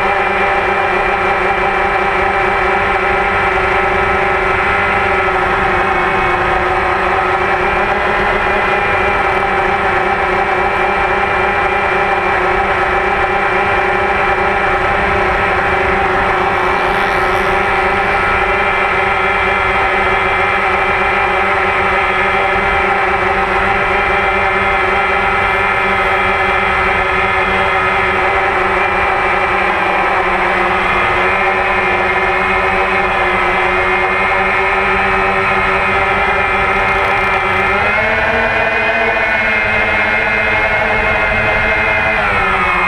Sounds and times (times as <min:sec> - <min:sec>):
Vehicle: 0:00.0 - 0:42.8.